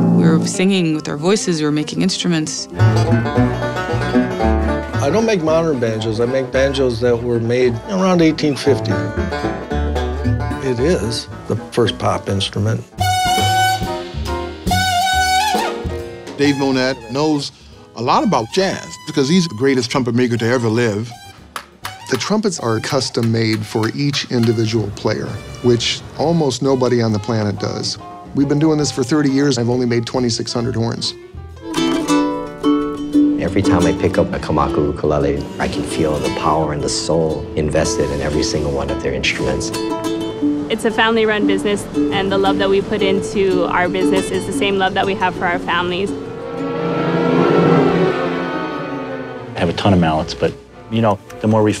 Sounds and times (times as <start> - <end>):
Music: 0.0 - 51.8
Speech: 16.4 - 21.1, 22.1 - 31.2, 33.4 - 39.7, 49.6 - 51.8.